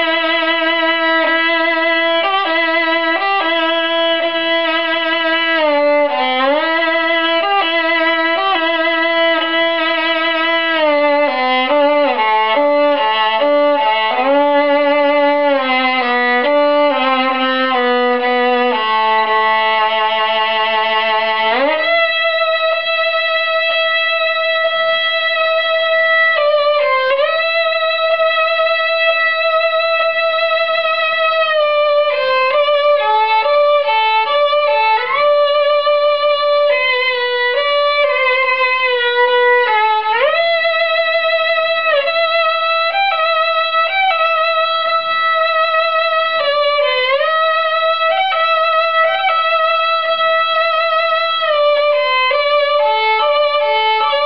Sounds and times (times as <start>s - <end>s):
Violin, fiddle: 0.0s - 54.2s.